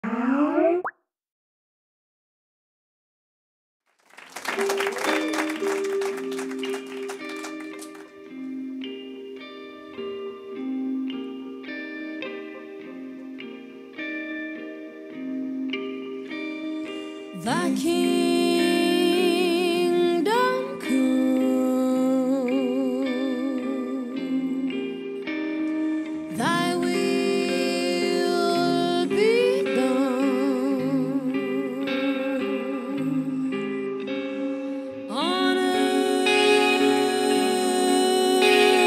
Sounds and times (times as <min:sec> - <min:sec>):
Musical instrument: 0:04.6 - 0:19.3.